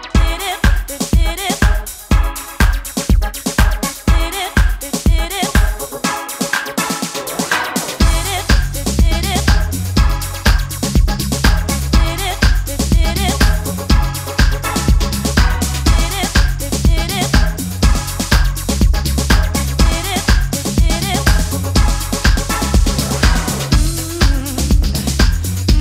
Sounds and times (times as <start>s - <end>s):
House music: 0.0s - 25.8s.